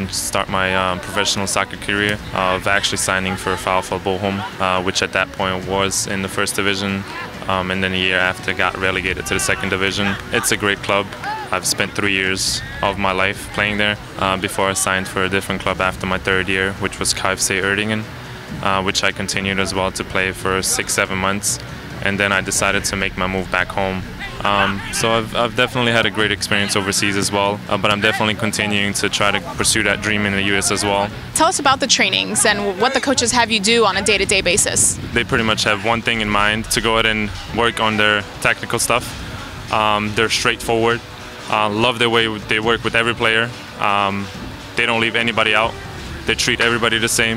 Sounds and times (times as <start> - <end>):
Inside, public space: 0.0 - 47.3
Music: 0.0 - 47.3
Speech: 0.0 - 47.3.